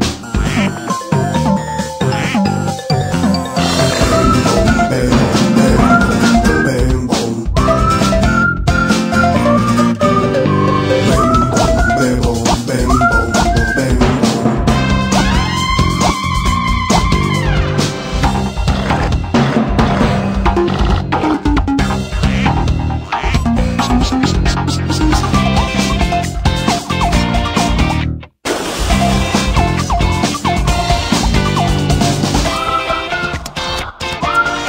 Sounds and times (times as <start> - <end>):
Music: 0.0 - 34.6.